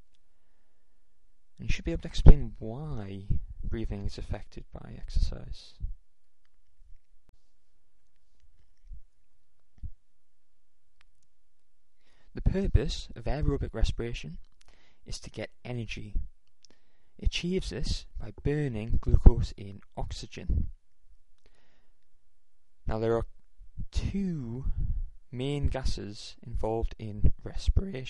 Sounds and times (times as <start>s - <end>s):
Speech: 1.6s - 5.8s, 12.4s - 14.4s, 15.1s - 16.2s, 17.2s - 20.7s, 22.9s - 23.3s, 23.9s - 28.0s.